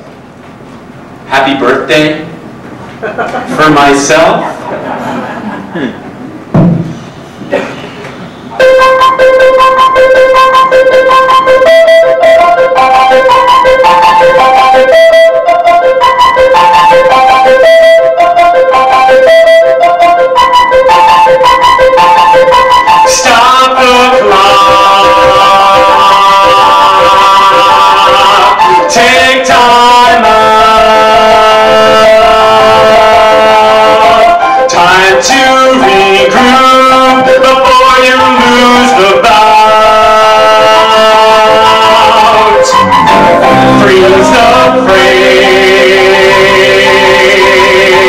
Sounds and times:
Music: 0:08.6 - 0:48.0.

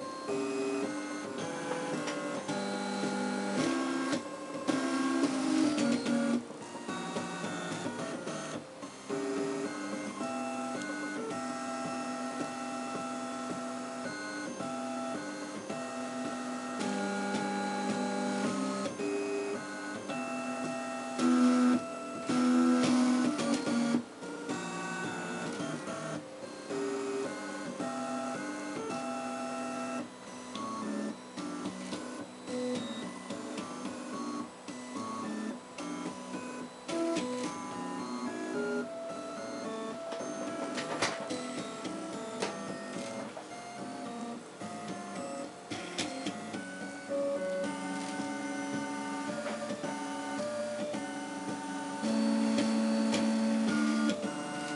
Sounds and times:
Music: 0:00.0 - 0:54.7
Printer: 0:00.0 - 0:54.7.

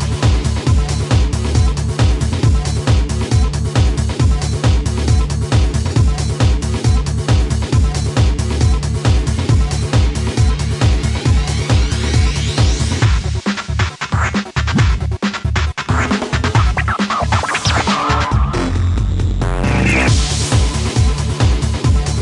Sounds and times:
Music: 0:00.0 - 0:22.2
Sound effect: 0:15.9 - 0:18.9.

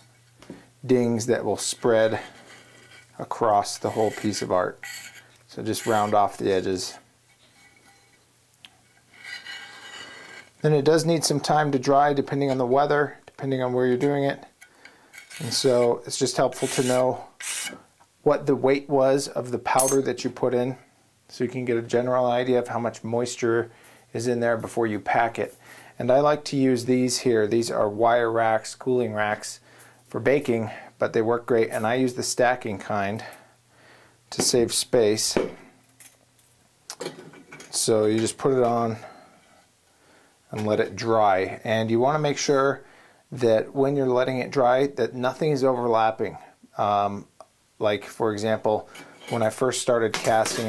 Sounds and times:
Inside, small room: 0:00.0 - 0:50.6
Speech: 0:00.8 - 0:02.3, 0:03.2 - 0:04.8, 0:05.5 - 0:07.1, 0:10.6 - 0:14.5, 0:15.4 - 0:17.3, 0:18.2 - 0:33.4, 0:34.3 - 0:35.6, 0:37.7 - 0:39.2, 0:40.5 - 0:50.6.

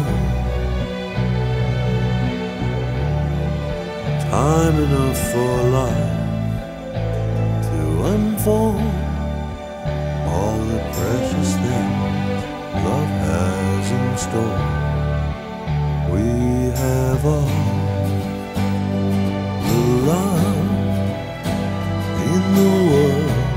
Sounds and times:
Music: 0:00.0 - 0:23.5.

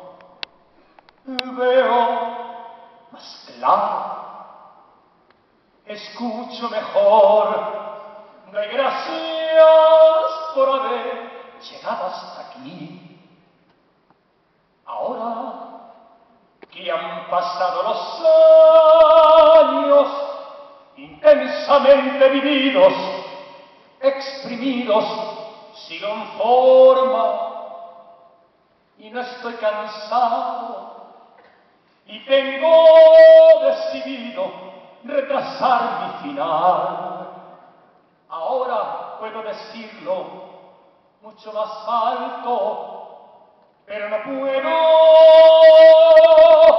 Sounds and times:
Vocal music: 0:00.0 - 0:04.3, 0:14.9 - 0:28.0, 0:43.9 - 0:46.7.

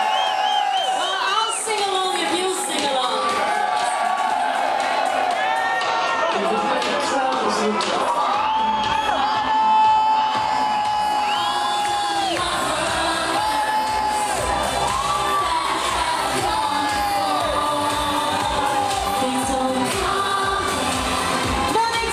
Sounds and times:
Speech: 0:01.0 - 0:03.3, 0:06.3 - 0:08.0
Music: 0:01.4 - 0:22.1.

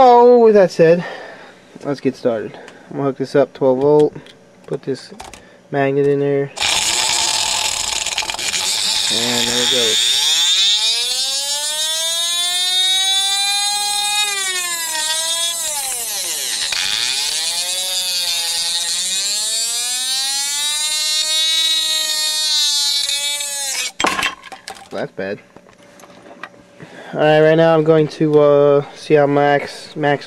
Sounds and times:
Speech: 0:00.0 - 0:01.1, 0:01.8 - 0:05.2, 0:05.8 - 0:06.6, 0:09.1 - 0:10.0, 0:24.9 - 0:25.4, 0:27.2 - 0:30.2.

